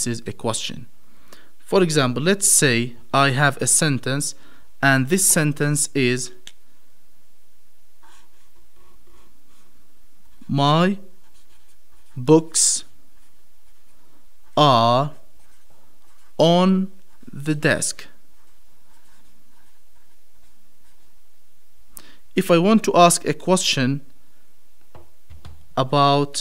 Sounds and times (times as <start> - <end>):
Speech: 0.0 - 0.9, 1.7 - 6.4, 10.4 - 11.1, 12.2 - 12.9, 14.6 - 15.3, 16.4 - 18.2, 22.4 - 24.1, 25.8 - 26.4
Writing: 8.0 - 21.2.